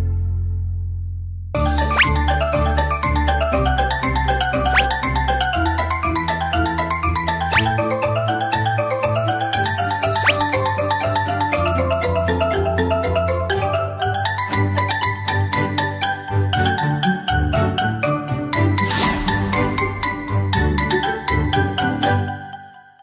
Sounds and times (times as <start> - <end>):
Music: 0.0 - 23.0.